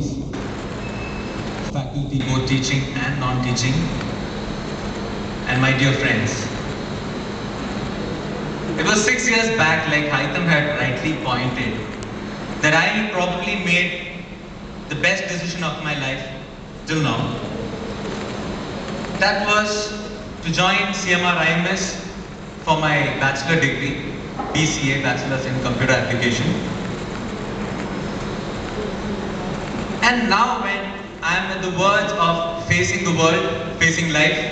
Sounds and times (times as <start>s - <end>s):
Narration, monologue: 1.5s - 17.7s, 18.4s - 27.2s, 29.8s - 34.5s
Male speech, man speaking: 1.7s - 3.9s, 5.5s - 6.5s, 8.8s - 11.8s, 12.6s - 14.1s, 14.9s - 17.4s, 19.2s - 22.0s, 22.7s - 24.0s, 24.6s - 26.7s, 30.0s - 34.5s.